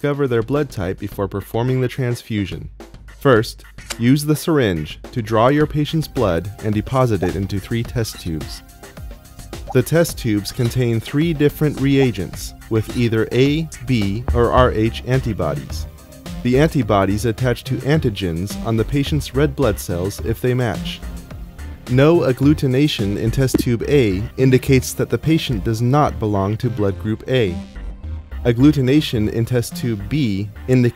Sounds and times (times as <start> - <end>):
Speech: 0.0 - 8.6, 9.8 - 21.0, 21.9 - 27.6, 28.4 - 30.9
Music: 0.0 - 30.9.